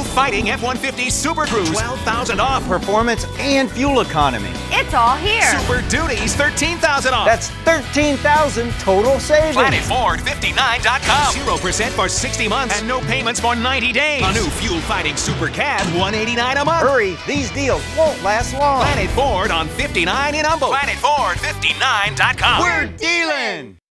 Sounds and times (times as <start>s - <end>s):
Music: 0.0s - 23.8s
Speech: 0.0s - 23.8s.